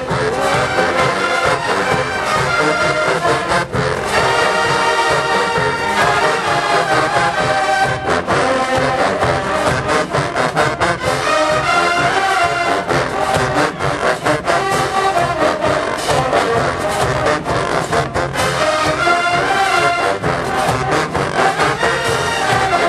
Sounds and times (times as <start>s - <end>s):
Music: 0.0s - 22.8s.